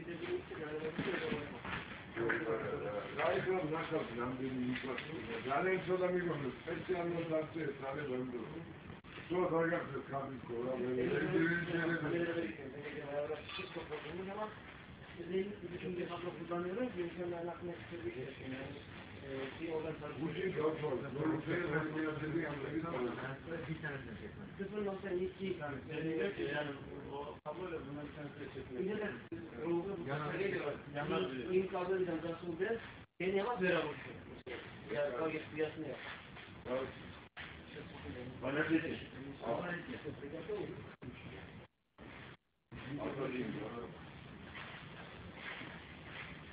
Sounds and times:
Speech: 0:00.0 - 0:37.0, 0:37.7 - 0:41.6, 0:42.8 - 0:44.0.

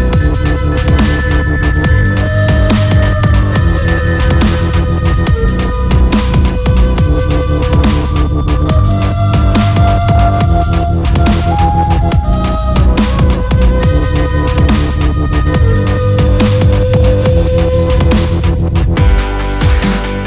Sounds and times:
Drum and bass: 0:00.0 - 0:20.2.

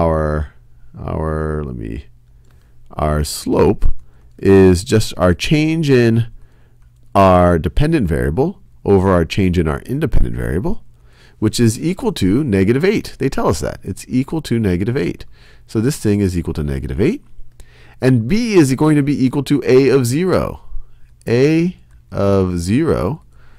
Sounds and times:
Speech: 0:00.0 - 0:02.1, 0:02.9 - 0:06.4, 0:07.2 - 0:10.8, 0:11.4 - 0:17.3, 0:18.0 - 0:23.3.

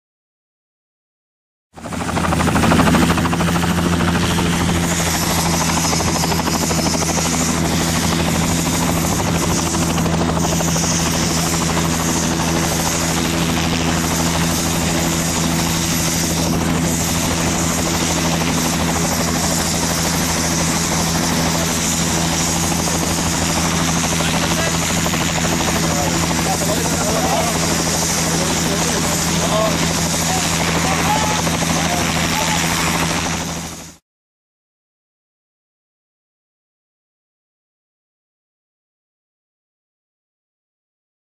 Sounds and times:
Helicopter: 0:01.8 - 0:34.0
Speech: 0:24.2 - 0:25.0, 0:25.7 - 0:33.0.

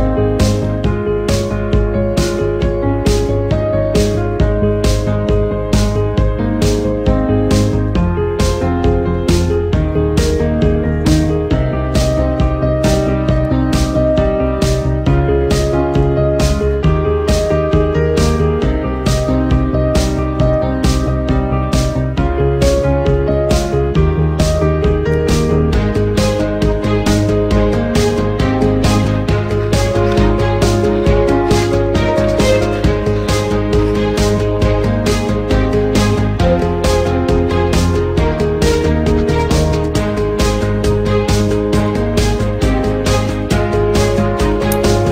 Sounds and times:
Guitar: 0:00.0 - 0:45.1.

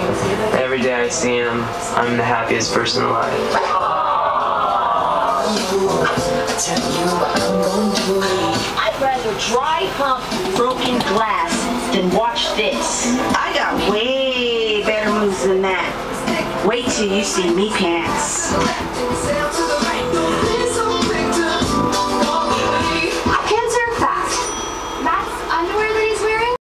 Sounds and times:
Music: 0:00.0 - 0:26.6.

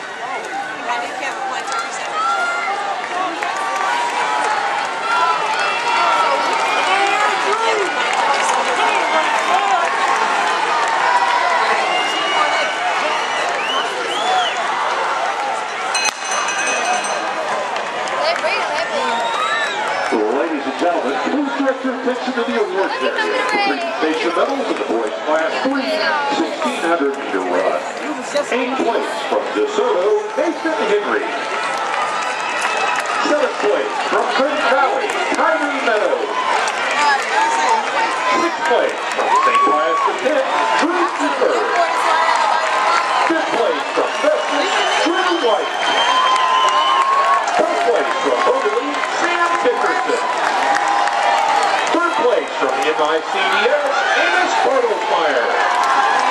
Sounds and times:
Inside, public space: 0:00.0 - 0:56.3.

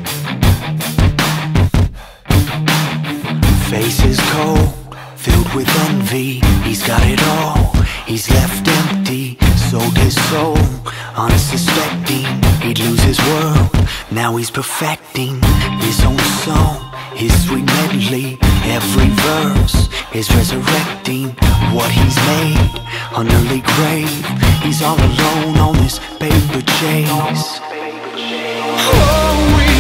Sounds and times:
Music: 0:00.0 - 0:29.8.

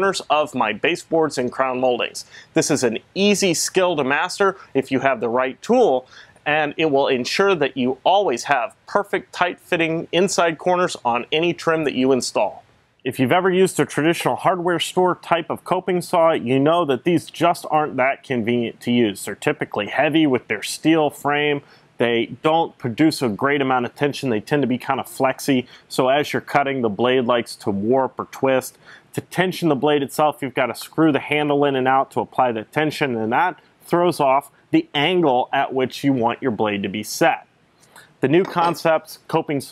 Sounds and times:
Speech: 0:00.0 - 0:39.7.

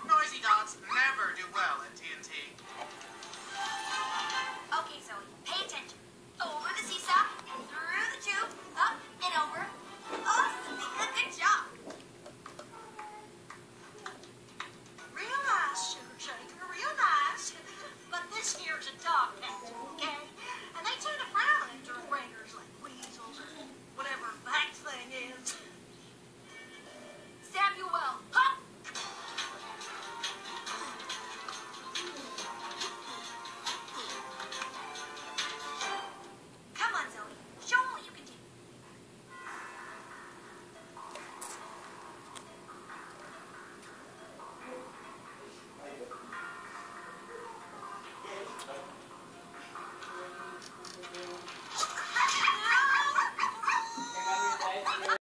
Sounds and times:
Music: 0:02.6 - 0:04.8, 0:07.4 - 0:11.7, 0:12.7 - 0:20.8, 0:26.4 - 0:27.5, 0:28.8 - 0:36.4, 0:39.3 - 0:52.8.

